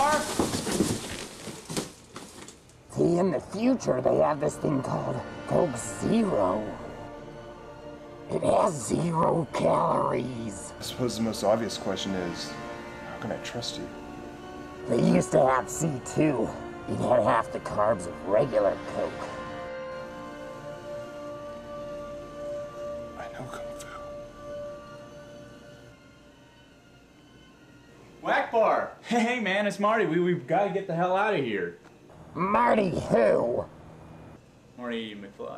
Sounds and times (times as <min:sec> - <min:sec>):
Music: 0:02.9 - 0:35.5.